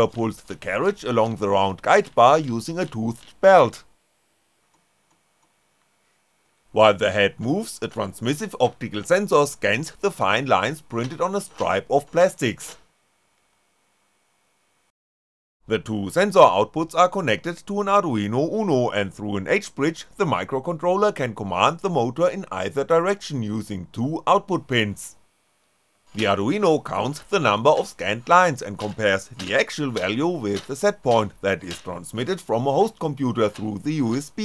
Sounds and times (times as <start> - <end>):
Speech: 0.0 - 3.9, 6.8 - 12.8, 15.7 - 25.2, 26.1 - 34.4.